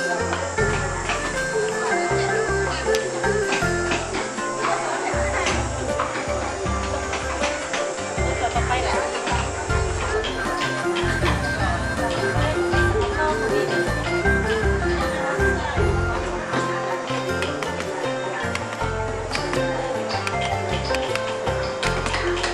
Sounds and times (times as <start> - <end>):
Music: 0.0 - 22.5
Speech: 8.2 - 9.4.